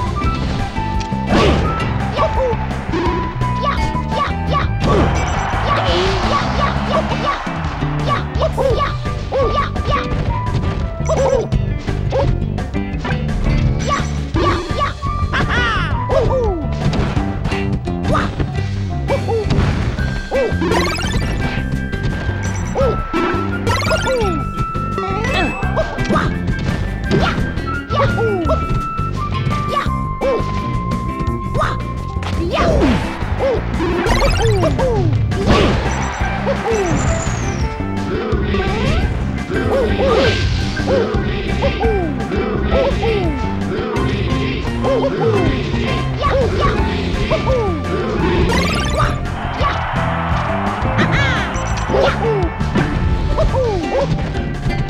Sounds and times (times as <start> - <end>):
Music: 0.0 - 54.9.